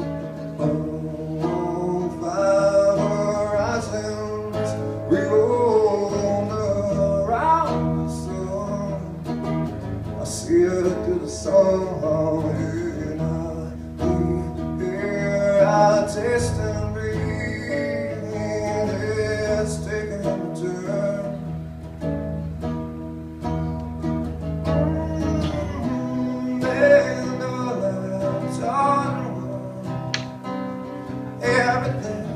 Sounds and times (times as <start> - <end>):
Music: 0.0 - 32.3.